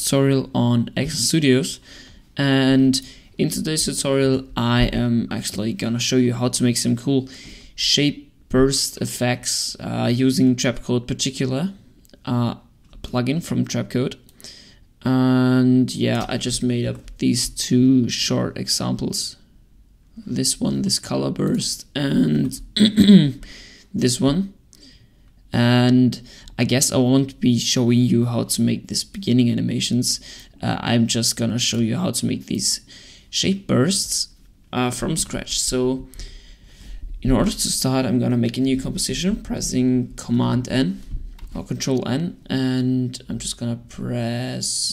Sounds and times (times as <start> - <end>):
Speech: 0.0 - 1.8, 2.4 - 14.2, 15.0 - 19.5, 20.2 - 24.6, 25.5 - 36.1, 37.2 - 44.9.